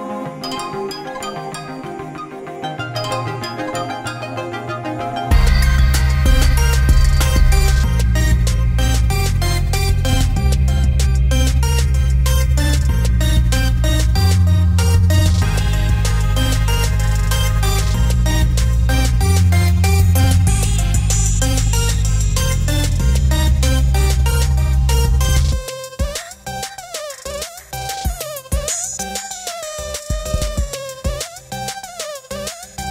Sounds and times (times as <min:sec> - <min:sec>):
Independent music: 0:00.0 - 0:32.9
Soundtrack music: 0:00.0 - 0:32.9.